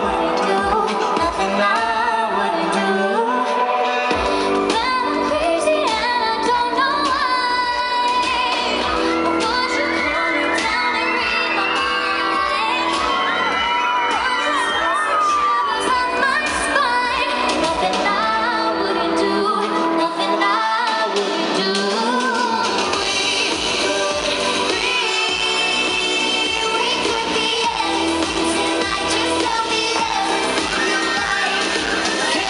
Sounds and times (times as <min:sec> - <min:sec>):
Music: 0:00.0 - 0:32.5.